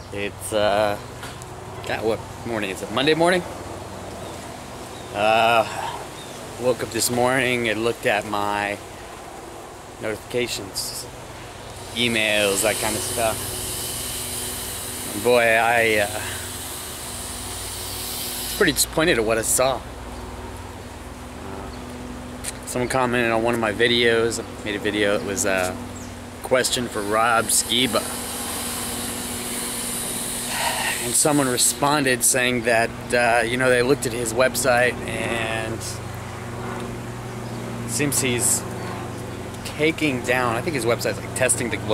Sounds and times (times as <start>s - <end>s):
Outside, urban or manmade: 0.0s - 41.9s
Speech: 0.1s - 1.0s, 1.9s - 3.5s, 5.2s - 6.0s, 6.6s - 8.8s, 10.0s - 11.1s, 12.0s - 13.4s, 15.1s - 16.4s, 18.6s - 19.8s, 21.4s - 21.8s, 22.7s - 25.8s, 26.4s - 28.1s, 31.0s - 36.0s, 37.9s - 38.7s, 39.6s - 41.9s.